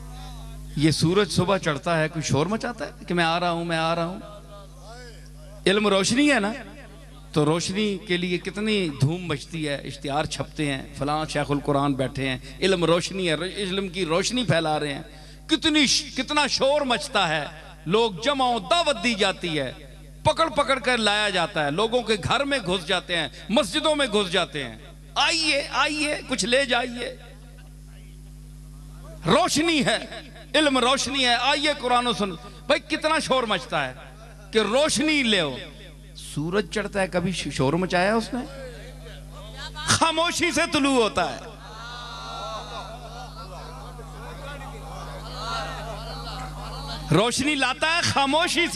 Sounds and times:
Male speech, man speaking: 0:00.2 - 0:27.2, 0:29.0 - 0:41.6, 0:42.3 - 0:48.7.

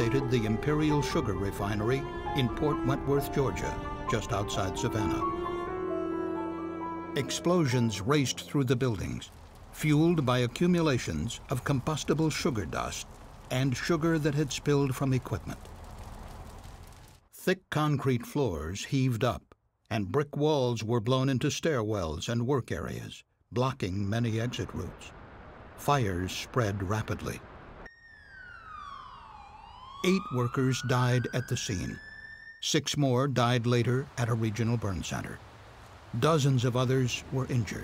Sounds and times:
Speech: 0:00.0 - 0:05.2, 0:07.2 - 0:15.6, 0:17.4 - 0:25.1, 0:25.8 - 0:27.4, 0:30.0 - 0:32.0, 0:32.6 - 0:35.4, 0:36.2 - 0:37.8.

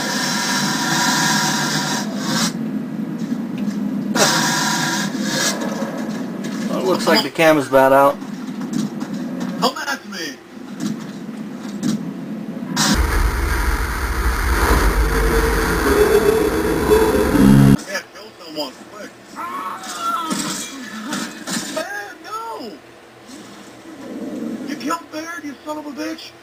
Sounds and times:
Speech: 0:06.7 - 0:08.2, 0:09.6 - 0:10.4, 0:17.8 - 0:20.9, 0:21.8 - 0:22.8, 0:24.7 - 0:26.4.

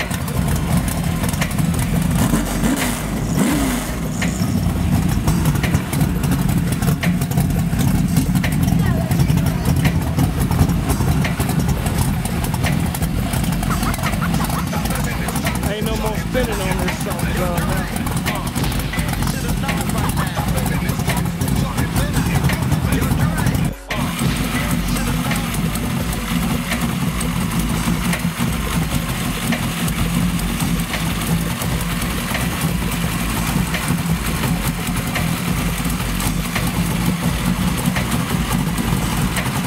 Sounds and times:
Idling: 0:00.0 - 0:39.6
Vehicle: 0:00.0 - 0:39.6.

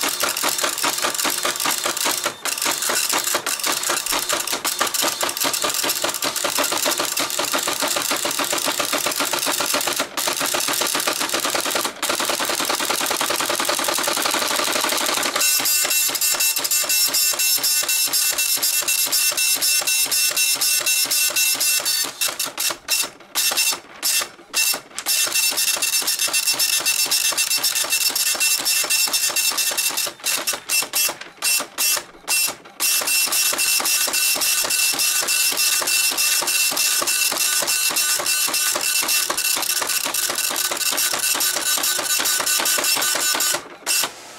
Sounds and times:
Inside, small room: 0:00.0 - 0:44.3
Printer: 0:00.0 - 0:44.3.

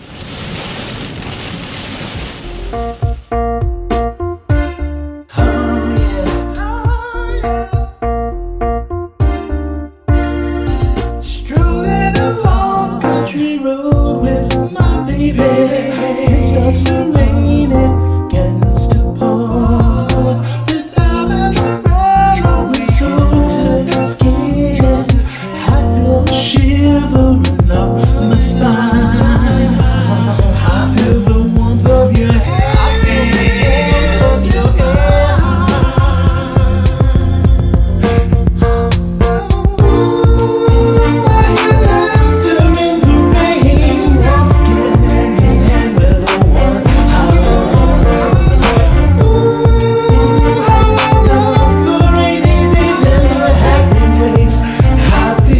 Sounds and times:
Pop music: 0:02.8 - 0:55.6
Singing: 0:05.3 - 0:07.9, 0:11.3 - 0:37.9, 0:39.3 - 0:55.6.

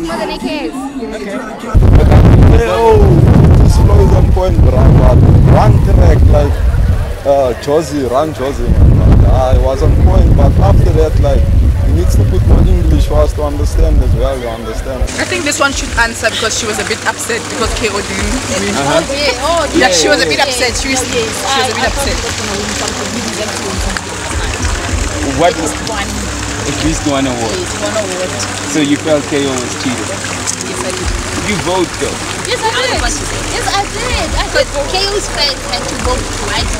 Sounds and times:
Outside, urban or manmade: 0:00.0 - 0:36.7
Water: 0:00.0 - 0:36.7
Music: 0:15.1 - 0:29.0, 0:29.6 - 0:36.7.

